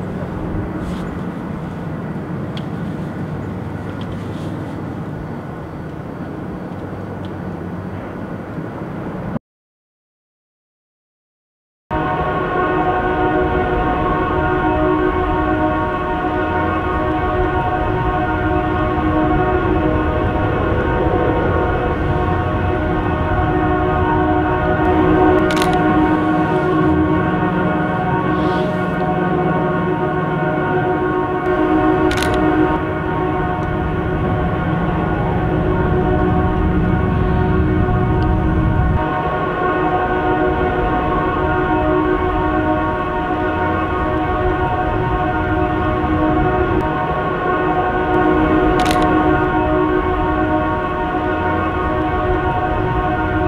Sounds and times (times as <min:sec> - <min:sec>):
Air horn, truck horn: 0:00.0 - 0:02.0, 0:11.9 - 0:53.4
Outside, rural or natural: 0:00.0 - 0:09.4, 0:11.9 - 0:53.4.